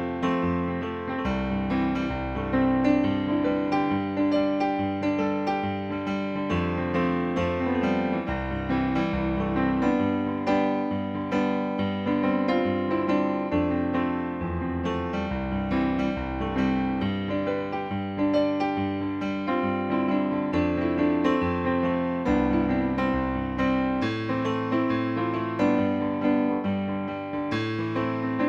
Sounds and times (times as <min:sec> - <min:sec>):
Music: 0:00.0 - 0:28.4.